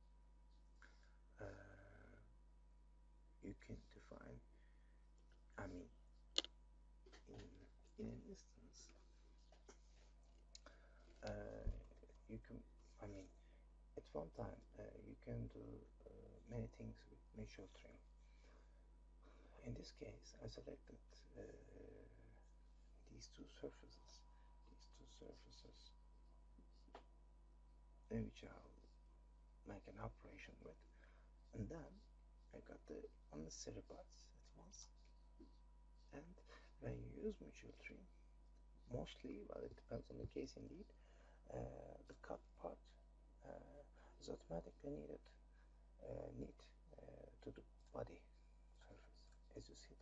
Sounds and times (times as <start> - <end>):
Speech: 1.4 - 2.3, 3.4 - 4.5, 5.6 - 6.5, 7.2 - 9.0, 10.6 - 13.4, 14.0 - 18.0, 19.6 - 22.4, 23.0 - 26.0, 28.1 - 28.9, 29.7 - 35.0, 36.1 - 38.1, 38.8 - 45.4, 46.0 - 50.0.